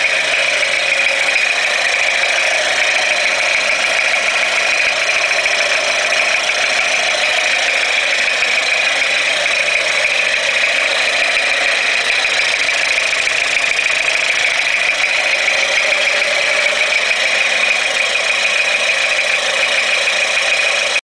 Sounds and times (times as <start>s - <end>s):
Idling: 0.0s - 21.0s
Medium engine (mid frequency): 0.0s - 21.0s.